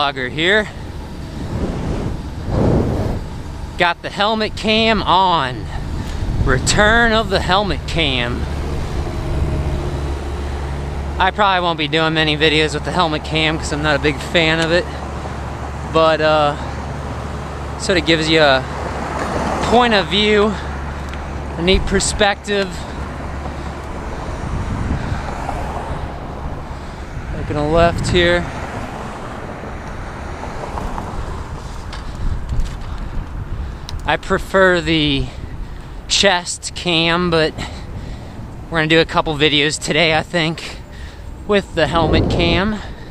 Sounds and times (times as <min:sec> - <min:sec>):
Speech: 0:00.0 - 0:00.7, 0:03.8 - 0:05.7, 0:06.4 - 0:08.5, 0:11.2 - 0:15.0, 0:15.9 - 0:16.7, 0:17.8 - 0:18.7, 0:19.6 - 0:20.6, 0:21.6 - 0:22.9, 0:27.3 - 0:28.5, 0:34.1 - 0:35.4, 0:36.1 - 0:37.7, 0:38.7 - 0:40.8, 0:41.5 - 0:42.9
Vehicle: 0:00.0 - 0:43.1.